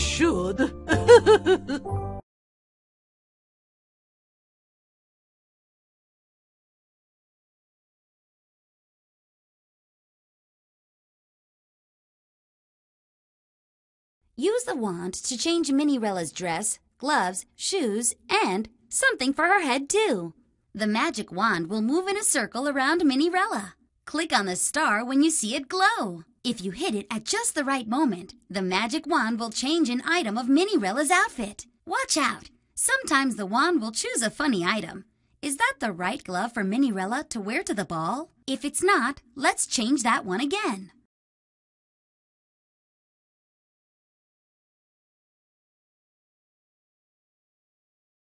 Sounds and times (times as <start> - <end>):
Music: 0.0 - 2.3.